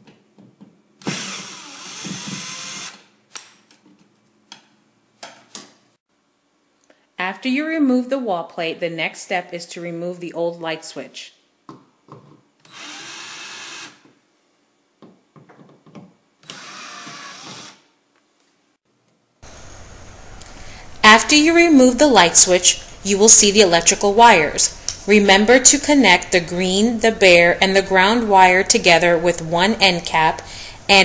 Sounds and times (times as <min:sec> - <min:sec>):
Power tool: 0:01.0 - 0:03.1, 0:12.6 - 0:14.1, 0:16.4 - 0:17.9.